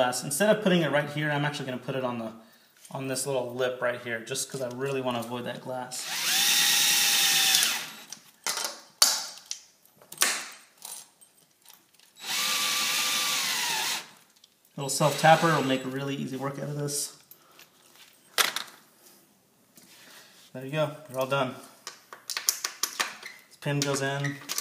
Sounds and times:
Speech: 0:00.0 - 0:06.1, 0:14.8 - 0:17.2, 0:20.6 - 0:21.7, 0:23.6 - 0:24.4.

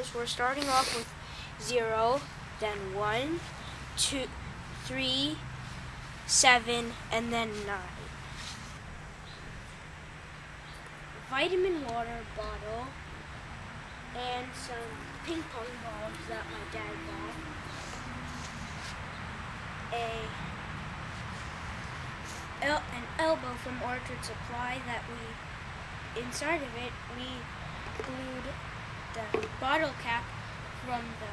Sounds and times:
Speech: 0:00.0 - 0:05.4, 0:06.3 - 0:08.1, 0:11.2 - 0:13.0, 0:14.2 - 0:17.6, 0:19.9 - 0:20.4, 0:22.6 - 0:25.4, 0:26.2 - 0:28.6, 0:29.2 - 0:31.3.

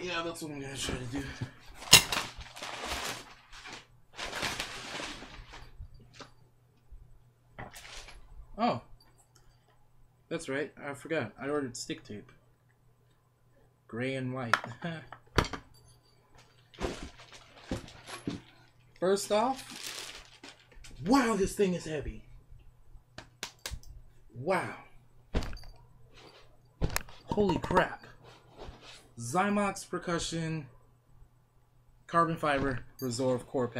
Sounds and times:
Speech: 0:00.0 - 0:01.5, 0:10.3 - 0:12.4, 0:13.9 - 0:15.1, 0:19.0 - 0:19.7, 0:21.0 - 0:22.3, 0:24.4 - 0:25.0, 0:27.3 - 0:28.1, 0:29.2 - 0:30.7, 0:32.1 - 0:33.7.

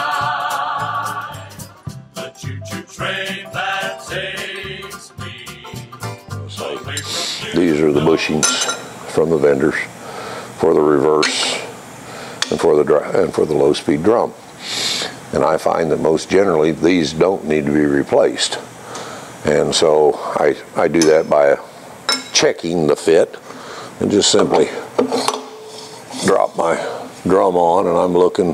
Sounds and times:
Speech: 0:07.6 - 0:09.9, 0:10.6 - 0:11.7, 0:12.4 - 0:14.4, 0:15.3 - 0:18.7, 0:19.4 - 0:21.7, 0:22.4 - 0:23.4, 0:24.0 - 0:24.9, 0:26.2 - 0:28.5.

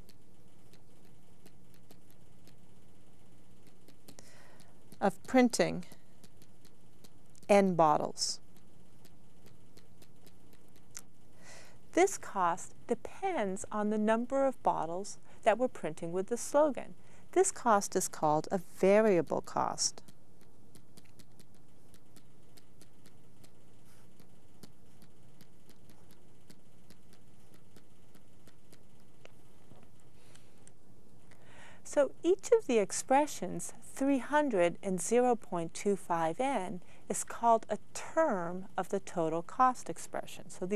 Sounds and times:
Speech: 0:05.0 - 0:06.0, 0:07.5 - 0:08.4, 0:12.0 - 0:20.0, 0:31.9 - 0:40.7.

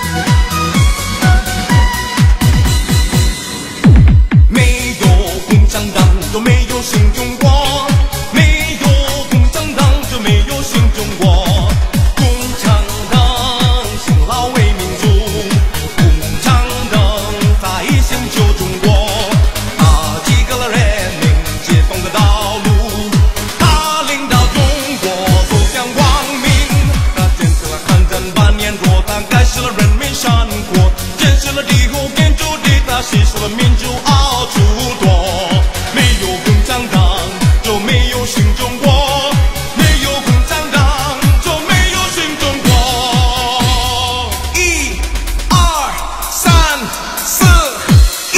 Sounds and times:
Music: 0:00.0 - 0:48.3
Male singing: 0:04.5 - 0:48.3.

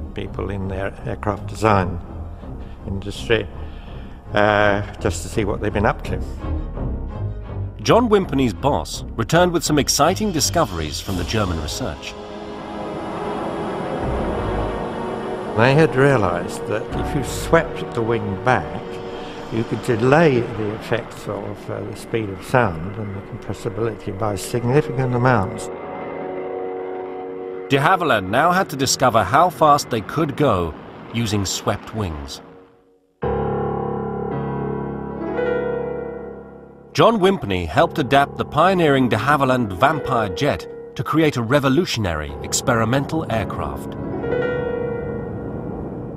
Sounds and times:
Music: 0:00.0 - 0:46.1
Speech: 0:00.2 - 0:02.0, 0:02.9 - 0:03.5, 0:04.4 - 0:06.3, 0:07.8 - 0:12.2, 0:15.6 - 0:25.7, 0:27.7 - 0:32.4, 0:37.0 - 0:43.9.

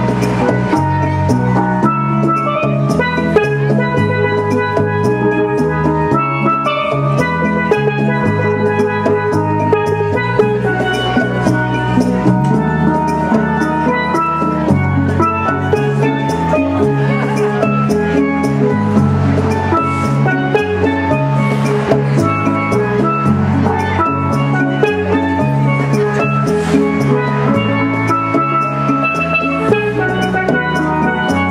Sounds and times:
Steelpan: 0:00.0 - 0:31.5.

